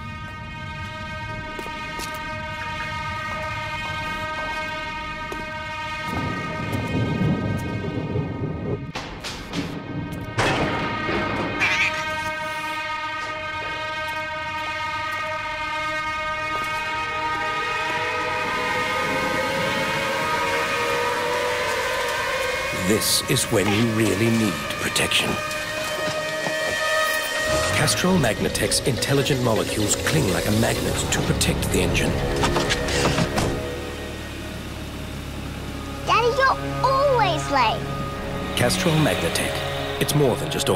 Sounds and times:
Music: 0.0s - 15.6s, 26.1s - 40.7s
Speech: 22.8s - 25.4s, 27.7s - 32.1s, 38.6s - 40.7s.

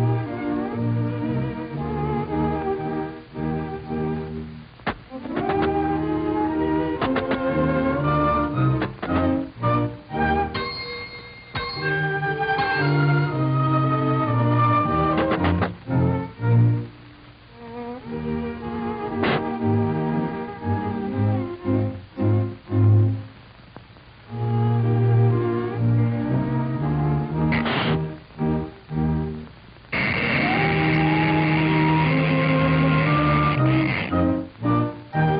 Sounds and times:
Music: 0.0s - 23.6s, 24.2s - 35.3s.

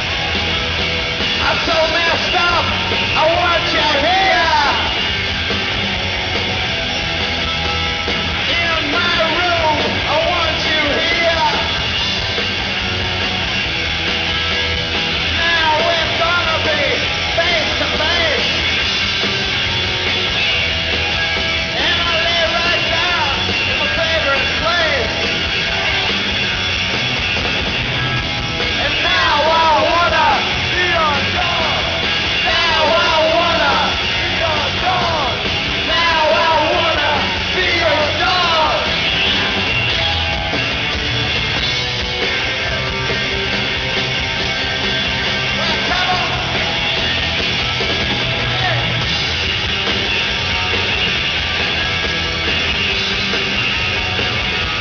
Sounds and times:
Music: 0.0s - 54.8s.

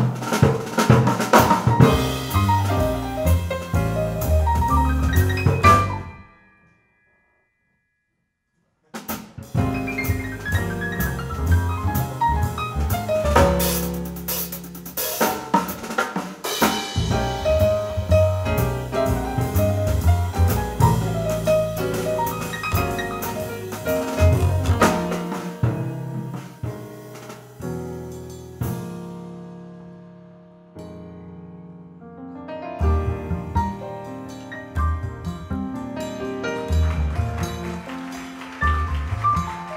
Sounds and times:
Drum: 0.0s - 6.1s, 9.0s - 29.2s, 32.8s - 39.7s.

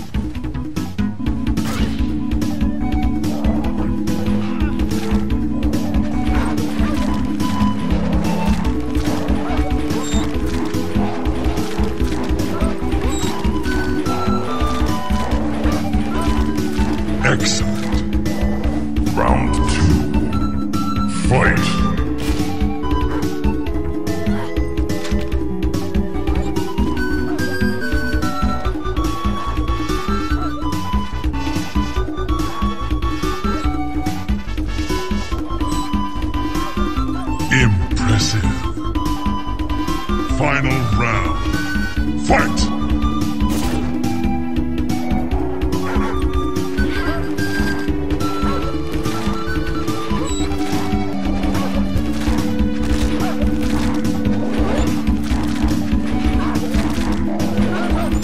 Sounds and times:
Music: 0.0s - 58.2s.

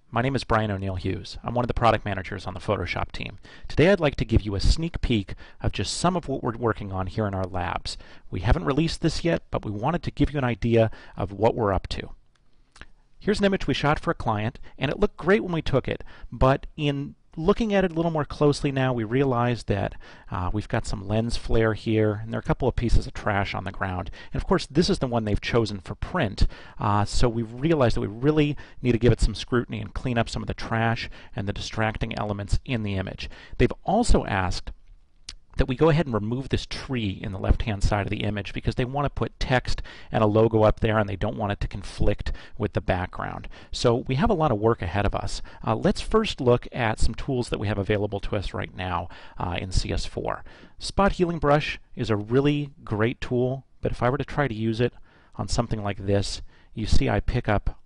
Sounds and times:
Speech: 0.1s - 12.2s, 13.2s - 57.8s.

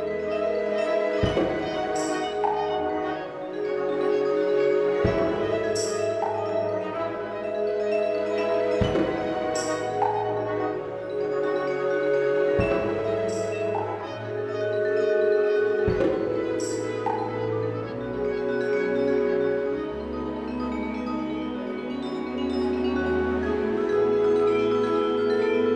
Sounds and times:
Percussion: 0.0s - 25.7s.

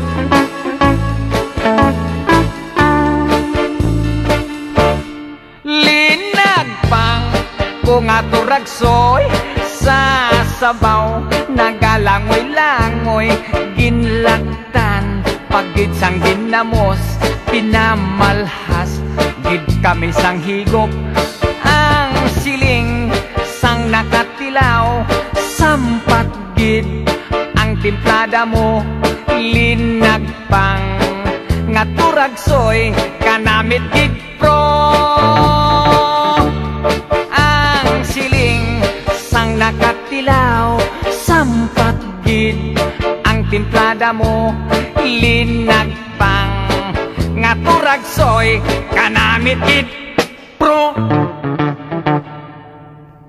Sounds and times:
Music: 0.0s - 53.2s.

